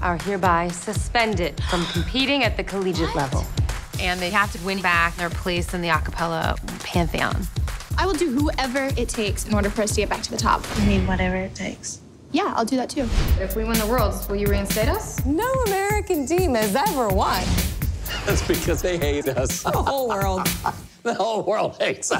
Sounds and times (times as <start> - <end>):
Music: 0.0 - 11.0, 13.2 - 21.0.